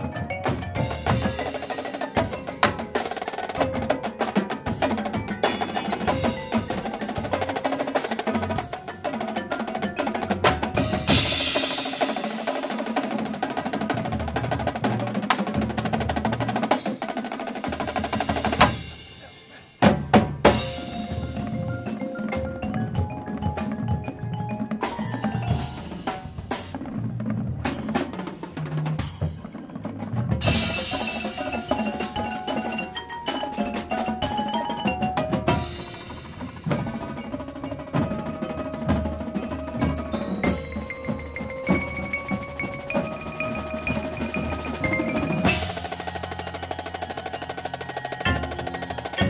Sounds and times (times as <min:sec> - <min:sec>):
Percussion: 0:00.0 - 0:49.3.